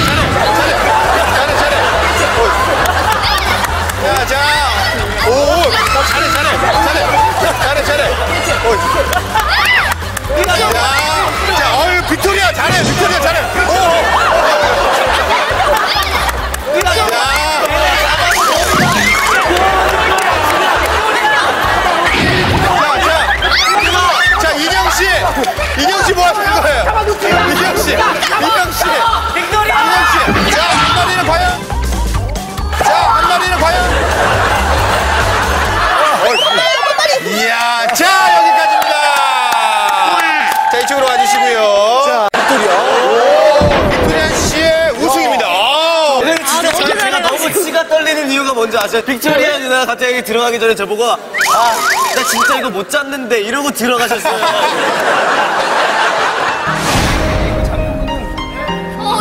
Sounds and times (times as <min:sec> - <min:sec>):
Music: 0:00.0 - 0:37.3, 0:54.8 - 0:59.2.